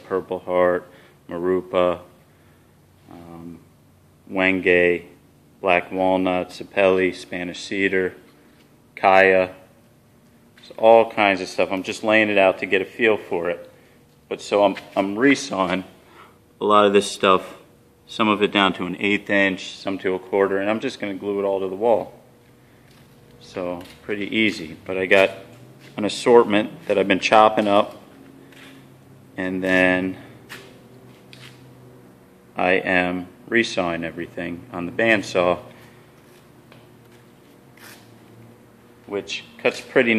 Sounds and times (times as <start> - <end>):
Speech: 0.0 - 2.1, 3.1 - 3.6, 4.3 - 8.2, 9.0 - 9.6, 10.6 - 13.7, 14.3 - 16.0, 16.6 - 22.2, 23.4 - 28.0, 29.4 - 30.3, 32.6 - 35.7, 39.1 - 40.1.